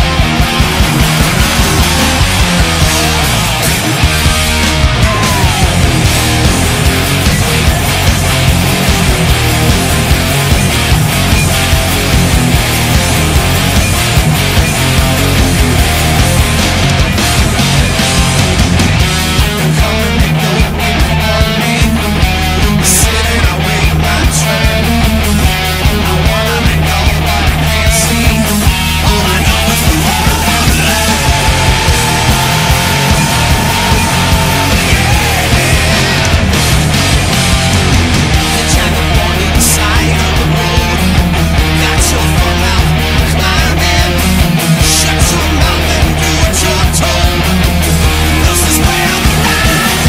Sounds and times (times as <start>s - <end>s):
Electric guitar: 0.0s - 50.0s.